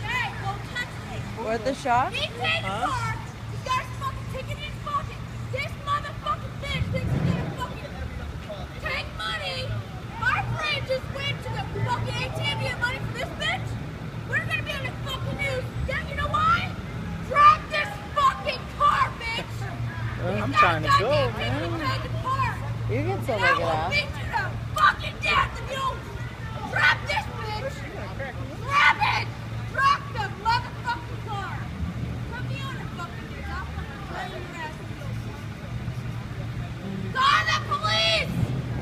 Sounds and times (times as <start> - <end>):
Vehicle: 0.0 - 38.8.